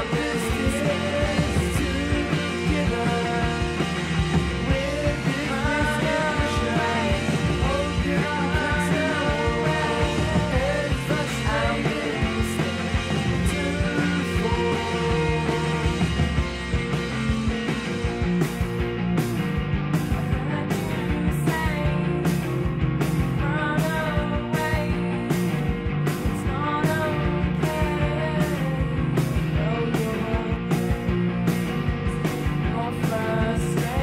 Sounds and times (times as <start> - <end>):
Music: 0.0 - 34.0.